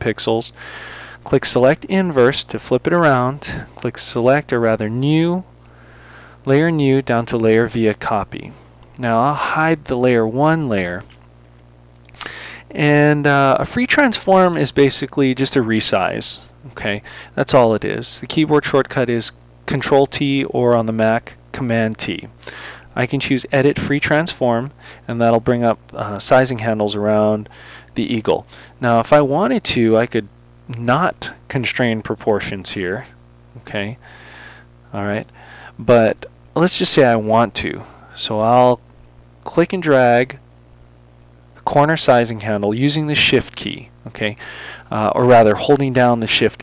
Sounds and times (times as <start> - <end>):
Speech: 0.0 - 0.6, 1.2 - 5.5, 6.5 - 11.1, 12.7 - 22.4, 23.0 - 34.0, 34.9 - 38.8, 39.4 - 40.4, 41.6 - 46.6.